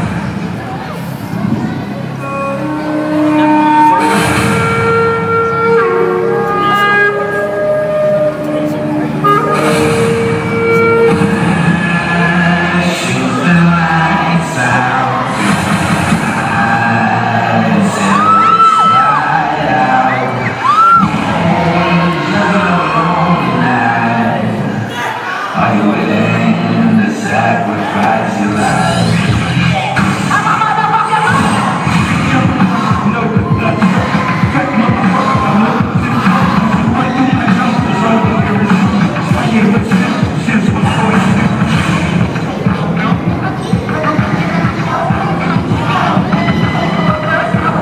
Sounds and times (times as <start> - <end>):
Techno: 0.0 - 24.9, 25.6 - 47.8.